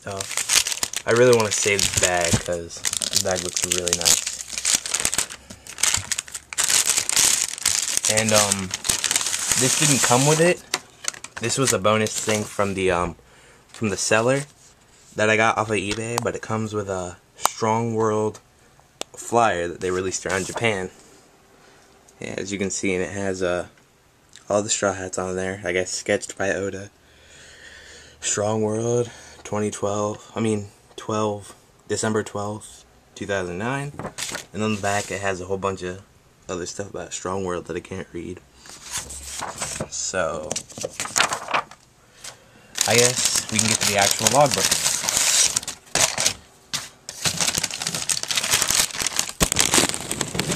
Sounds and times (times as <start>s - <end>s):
Crackle: 0.0s - 12.4s, 42.8s - 46.4s, 47.1s - 50.5s.